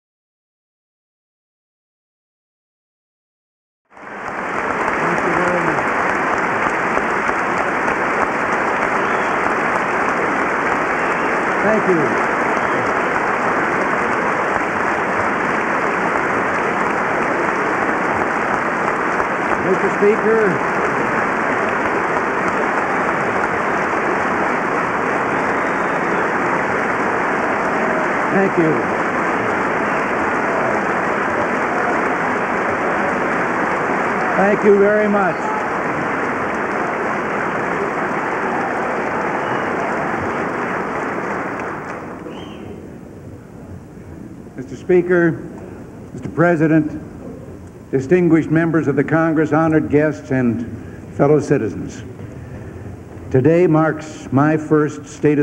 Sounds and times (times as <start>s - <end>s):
Male speech, man speaking: 5.0s - 5.8s, 11.6s - 12.2s, 19.6s - 20.6s, 28.3s - 28.8s, 34.4s - 35.5s, 44.6s - 45.4s, 46.2s - 47.0s, 48.0s - 52.1s, 53.3s - 55.4s.